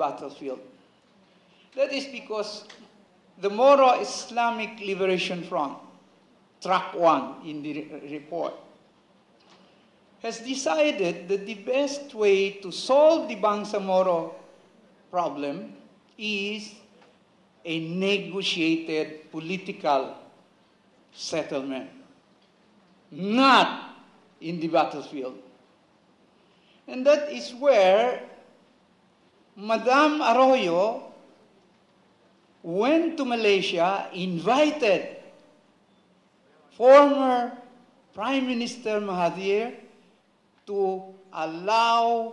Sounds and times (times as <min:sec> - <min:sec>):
Male speech, man speaking: 0:00.0 - 0:00.7, 0:01.8 - 0:02.7, 0:03.4 - 0:05.9, 0:06.6 - 0:08.7, 0:10.2 - 0:14.4, 0:15.1 - 0:16.9, 0:17.7 - 0:20.2, 0:21.2 - 0:22.0, 0:23.1 - 0:25.5, 0:26.9 - 0:28.4, 0:29.6 - 0:31.2, 0:32.6 - 0:35.2, 0:36.7 - 0:37.6, 0:38.2 - 0:39.8, 0:40.7 - 0:42.3
Narration, monologue: 0:00.0 - 0:42.3.